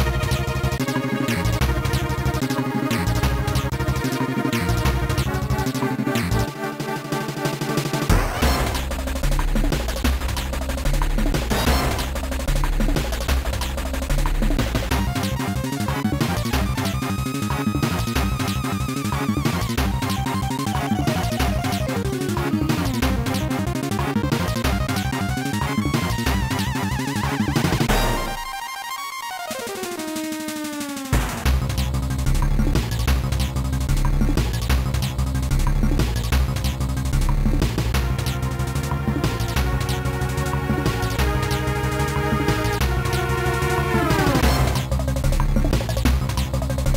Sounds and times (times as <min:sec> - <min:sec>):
Music: 0:00.0 - 0:46.9.